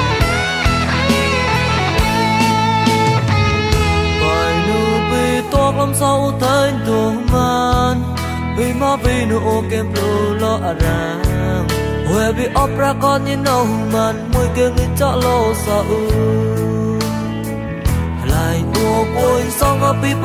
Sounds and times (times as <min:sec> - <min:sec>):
Music: 0:00.0 - 0:20.2.